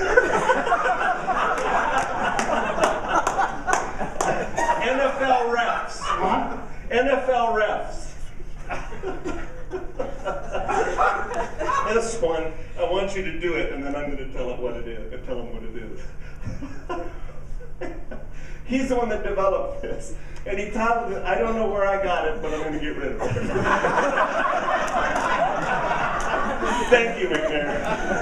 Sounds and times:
Inside, large room or hall: 0:00.0 - 0:28.2
Speech: 0:04.8 - 0:08.3, 0:11.8 - 0:16.0, 0:18.7 - 0:23.2, 0:26.8 - 0:27.9.

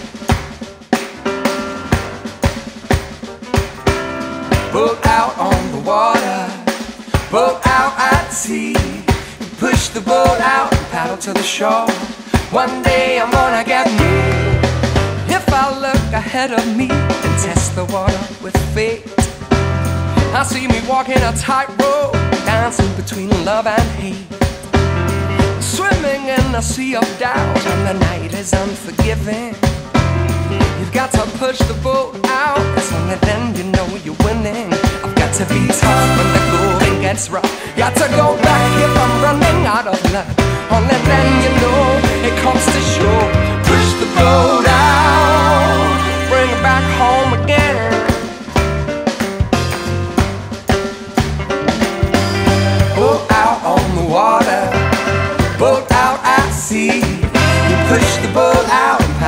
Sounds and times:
Music: 0:00.0 - 0:59.2.

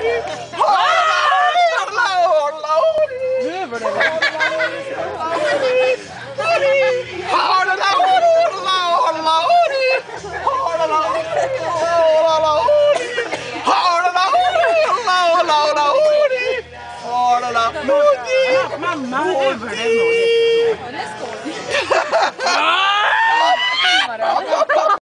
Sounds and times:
Music: 0:00.0 - 0:25.0.

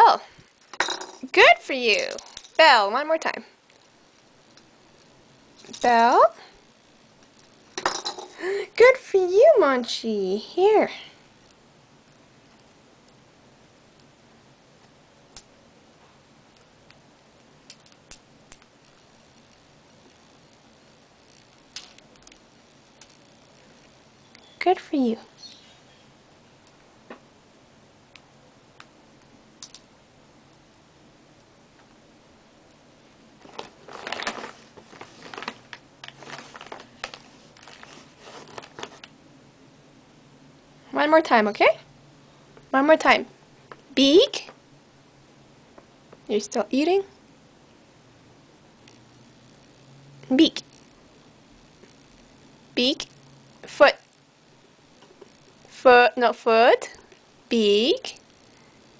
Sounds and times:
Speech: 0:00.0 - 0:00.3, 0:01.2 - 0:03.5, 0:05.8 - 0:06.5, 0:08.6 - 0:11.2, 0:24.6 - 0:25.3, 0:40.9 - 0:41.8, 0:42.7 - 0:43.3, 0:44.0 - 0:44.5, 0:46.3 - 0:47.1, 0:50.3 - 0:50.6, 0:52.8 - 0:53.1, 0:53.7 - 0:54.0, 0:55.7 - 0:58.2.

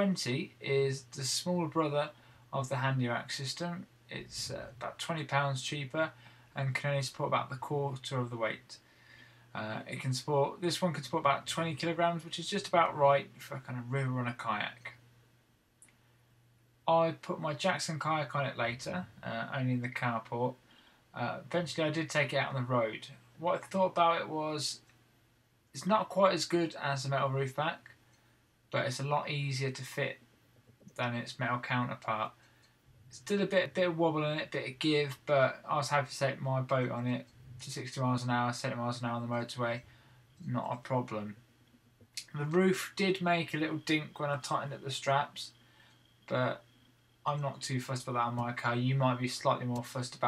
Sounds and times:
Speech: 0:00.0 - 0:08.8, 0:09.5 - 0:15.0, 0:16.8 - 0:20.6, 0:21.2 - 0:24.9, 0:25.8 - 0:27.9, 0:28.8 - 0:30.2, 0:30.9 - 0:32.4, 0:33.1 - 0:41.4, 0:42.2 - 0:45.6, 0:46.3 - 0:50.2.

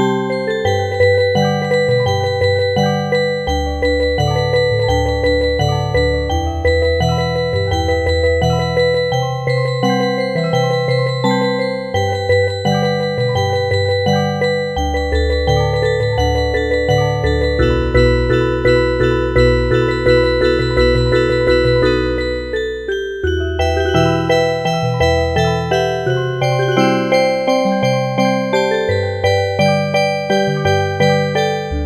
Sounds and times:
Music: 0:00.0 - 0:31.8.

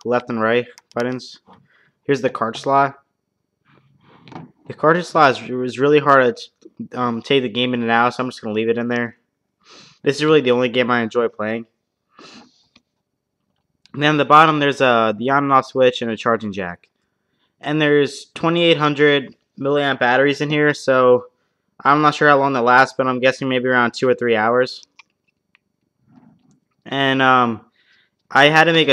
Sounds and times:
Speech: 0:00.0 - 0:01.5, 0:02.1 - 0:03.1, 0:04.7 - 0:09.3, 0:10.0 - 0:11.8, 0:13.9 - 0:16.9, 0:17.6 - 0:25.0, 0:26.8 - 0:27.7, 0:28.3 - 0:28.9.

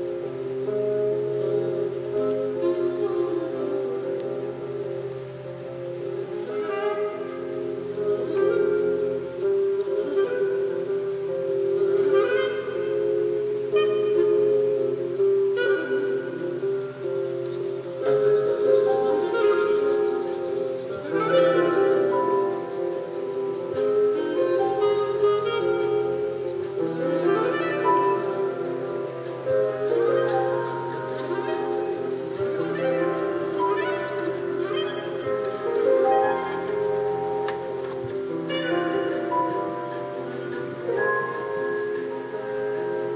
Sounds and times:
Music: 0:00.0 - 0:43.1.

